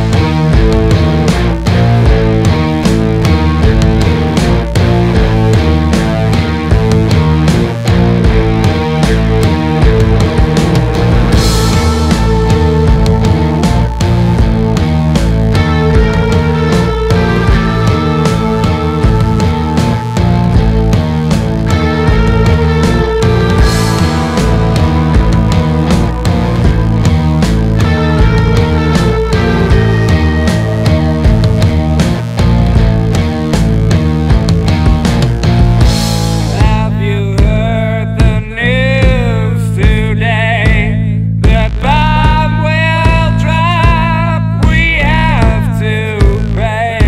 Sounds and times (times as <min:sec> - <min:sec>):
Music: 0:00.0 - 0:47.0.